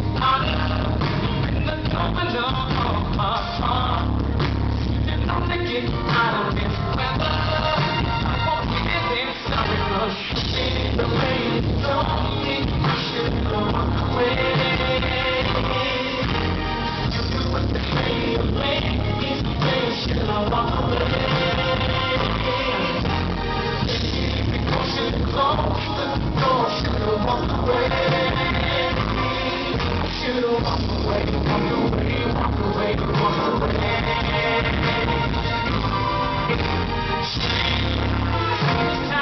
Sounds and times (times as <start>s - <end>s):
Music: 0.0s - 39.2s.